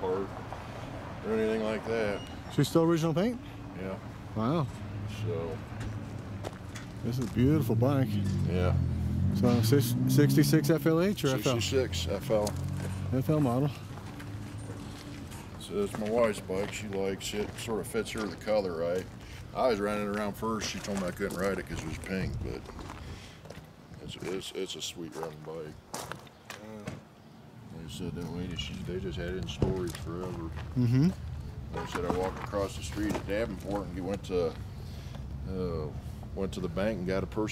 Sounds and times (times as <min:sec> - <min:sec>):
Speech: 0:07.1 - 0:08.8, 0:09.4 - 0:13.8, 0:15.6 - 0:22.7, 0:24.0 - 0:25.8, 0:27.7 - 0:31.0, 0:31.8 - 0:34.6, 0:35.5 - 0:37.5.